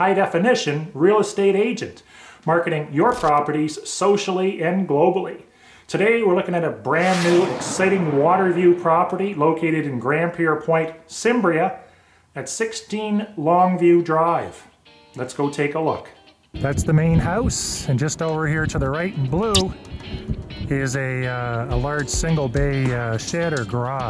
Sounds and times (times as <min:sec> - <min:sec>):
Speech: 0:00.0 - 0:11.8, 0:12.4 - 0:19.8, 0:20.7 - 0:24.0
Music: 0:14.8 - 0:24.0.